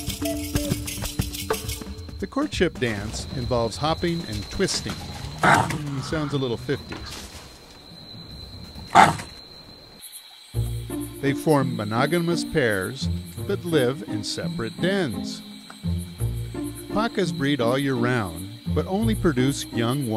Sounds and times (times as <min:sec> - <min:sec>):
Music: 0:00.0 - 0:06.3, 0:10.6 - 0:20.1
Outside, rural or natural: 0:00.0 - 0:20.1
Speech: 0:02.2 - 0:07.2, 0:11.2 - 0:15.4, 0:17.0 - 0:20.1
Animal: 0:03.3 - 0:10.1.